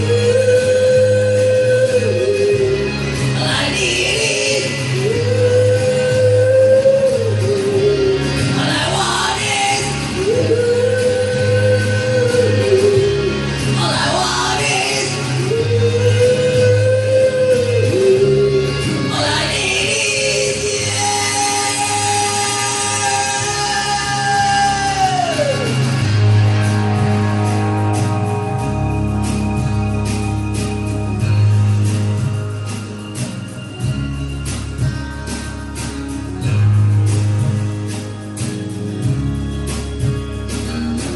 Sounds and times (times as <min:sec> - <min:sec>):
Vocal music: 0:00.0 - 0:41.1.